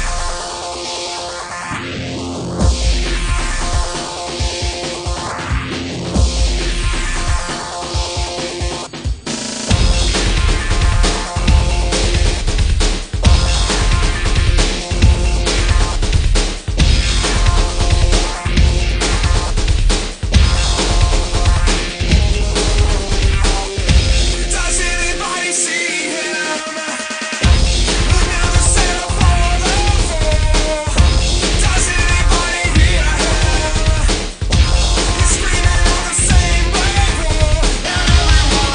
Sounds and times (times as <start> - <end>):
Music: 0.0 - 38.7.